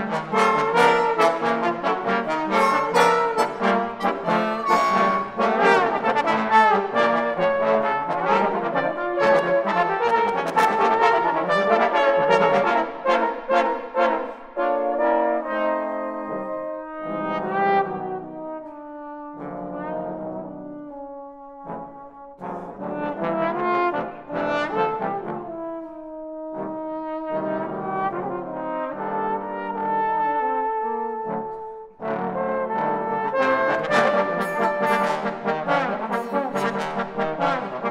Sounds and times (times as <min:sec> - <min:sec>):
Trombone: 0:00.0 - 0:37.9.